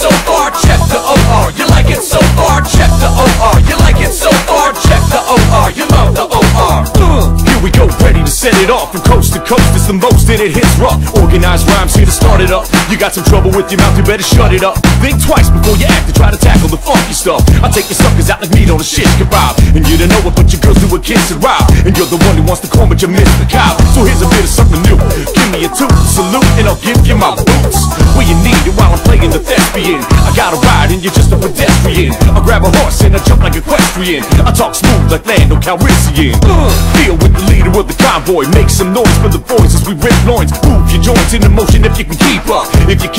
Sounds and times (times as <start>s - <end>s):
Dance music: 0.0s - 43.1s
Pop music: 0.0s - 43.1s.